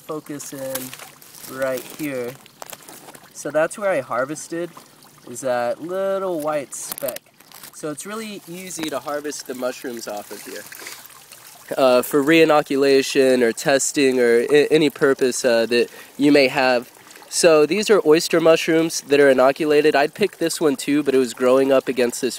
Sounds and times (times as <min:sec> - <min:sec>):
Speech: 0:00.0 - 0:00.9, 0:01.5 - 0:02.4, 0:03.4 - 0:04.7, 0:05.3 - 0:07.2, 0:07.8 - 0:10.7, 0:11.7 - 0:22.3
Stream: 0:00.0 - 0:22.3.